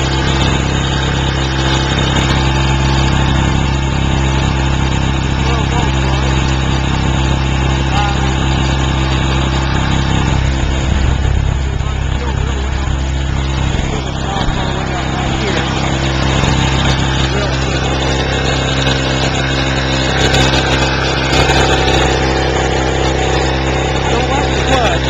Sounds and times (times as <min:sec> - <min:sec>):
Speech: 0:05.4 - 0:06.6, 0:07.8 - 0:08.6, 0:11.6 - 0:16.2, 0:16.8 - 0:18.0, 0:24.0 - 0:25.1.